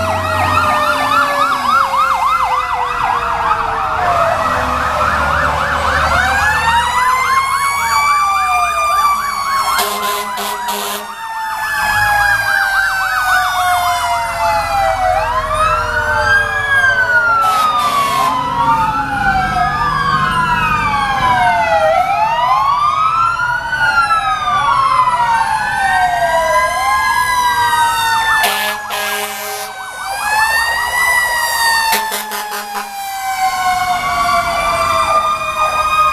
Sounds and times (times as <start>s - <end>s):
Ambulance (siren): 0.0s - 36.1s
Fire engine, fire truck (siren): 0.0s - 36.1s.